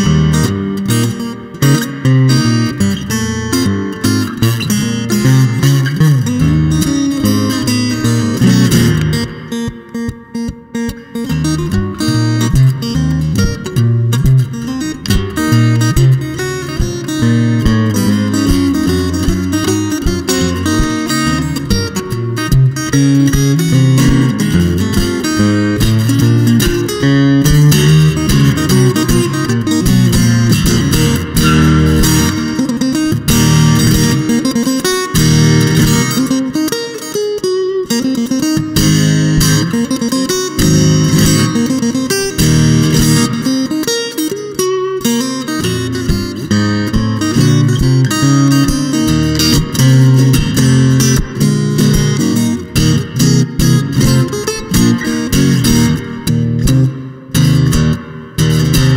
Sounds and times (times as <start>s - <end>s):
Blues: 0.0s - 58.9s
Strum: 0.0s - 58.9s.